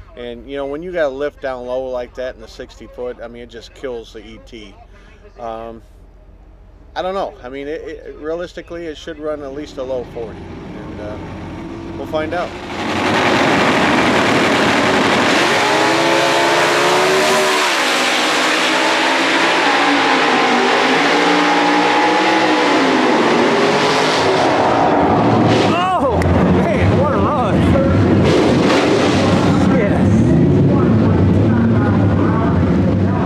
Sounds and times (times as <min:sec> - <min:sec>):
Speech: 0:00.1 - 0:05.9, 0:07.0 - 0:11.2.